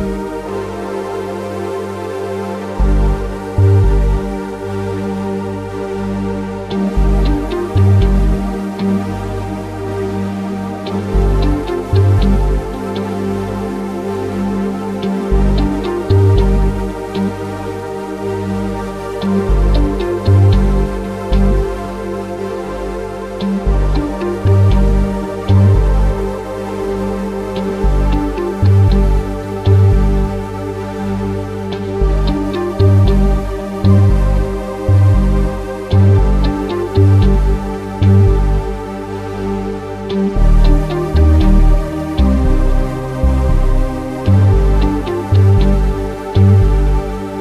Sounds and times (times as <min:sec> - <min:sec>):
Music: 0:00.0 - 0:47.4.